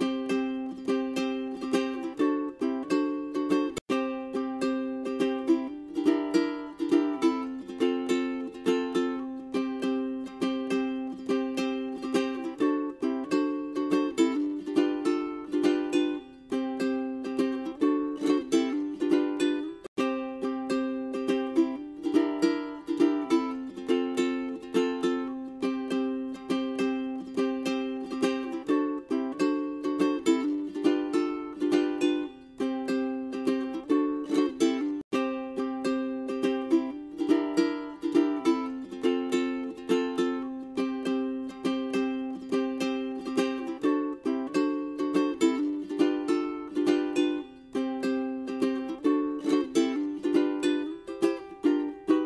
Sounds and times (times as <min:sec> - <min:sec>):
Music: 0:00.0 - 0:52.2.